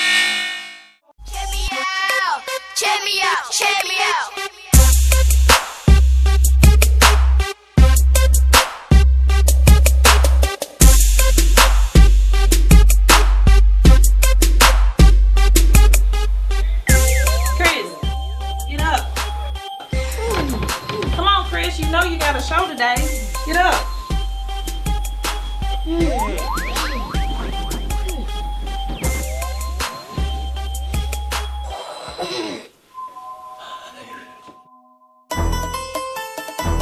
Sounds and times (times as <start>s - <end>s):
Hip hop music: 1.2s - 31.8s.